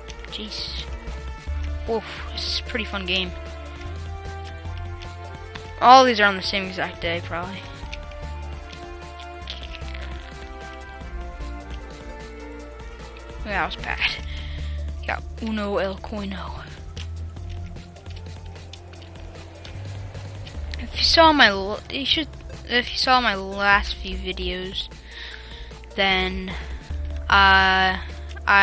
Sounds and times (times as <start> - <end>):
Music: 0.0 - 28.6
Speech: 0.4 - 0.9, 1.9 - 3.4, 5.8 - 7.7, 13.5 - 14.2, 15.1 - 16.8, 20.8 - 24.9, 26.0 - 26.6, 27.3 - 28.6.